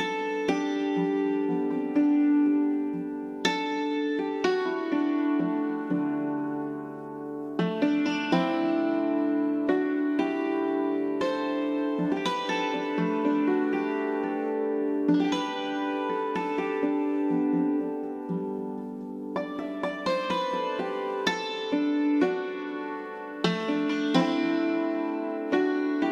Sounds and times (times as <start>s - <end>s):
Zither: 0.0s - 26.1s.